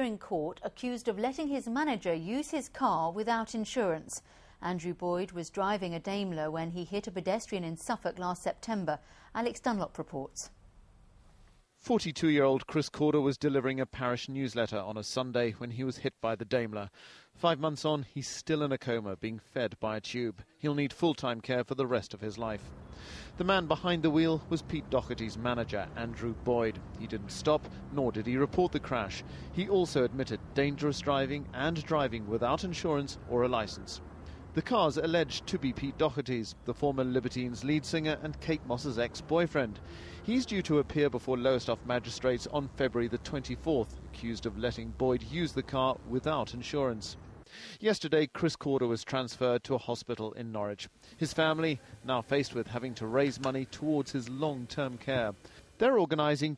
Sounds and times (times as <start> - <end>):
Speech: 0.0 - 10.5, 11.8 - 22.6, 23.4 - 34.0, 34.6 - 47.2, 47.8 - 56.5.